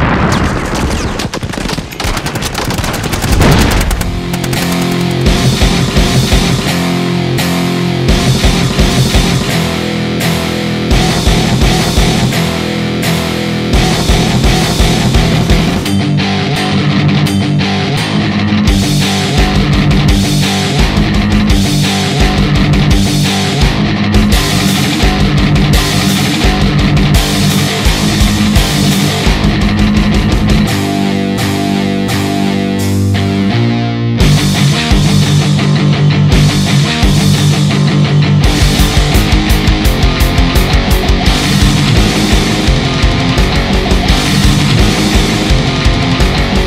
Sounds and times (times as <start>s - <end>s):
Heavy metal: 0.0s - 46.6s.